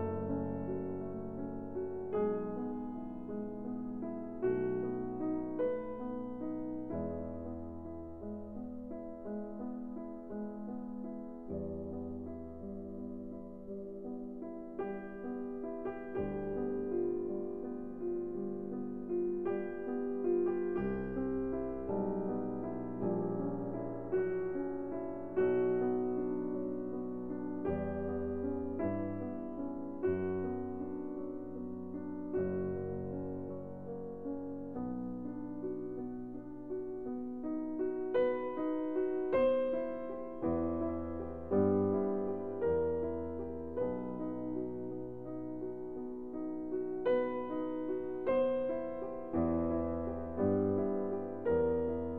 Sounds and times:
Music: 0.0 - 52.1.

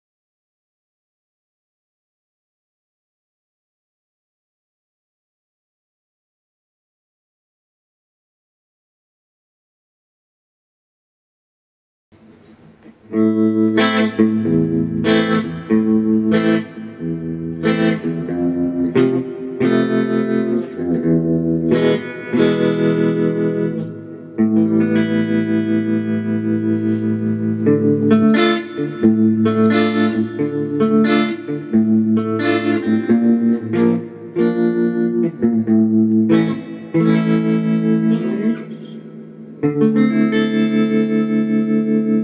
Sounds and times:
Bass guitar: 12.2 - 42.2.

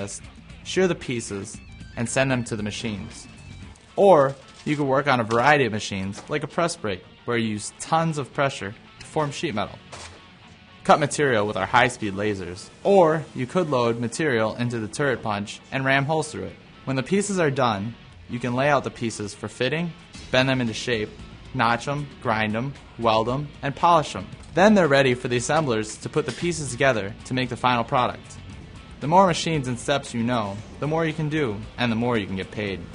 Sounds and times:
Speech: 0.0 - 3.3, 4.0 - 9.8, 10.9 - 28.4, 29.0 - 32.9
Music: 0.0 - 32.9.

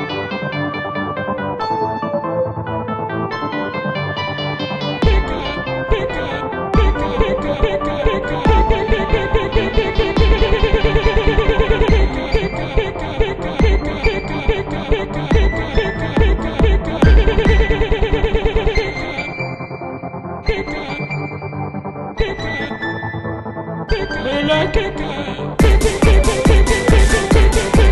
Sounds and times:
Techno: 0.0 - 27.9.

